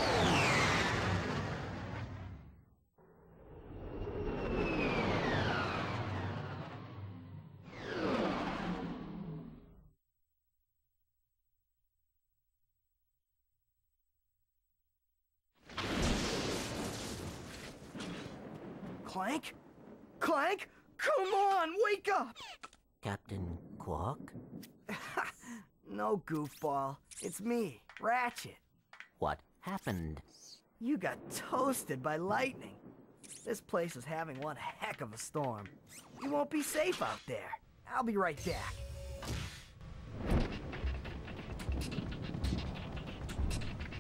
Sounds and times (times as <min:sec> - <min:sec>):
Speech: 0:19.1 - 0:19.6, 0:20.2 - 0:22.4, 0:23.0 - 0:24.3, 0:25.0 - 0:28.6, 0:29.2 - 0:32.8, 0:33.4 - 0:38.8.